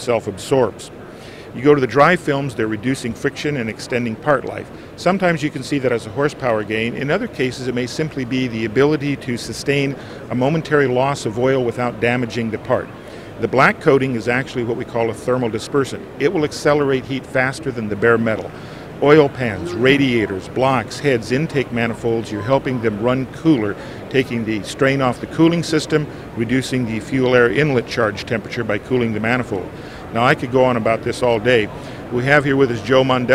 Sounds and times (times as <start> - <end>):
Speech: 0.0 - 33.3.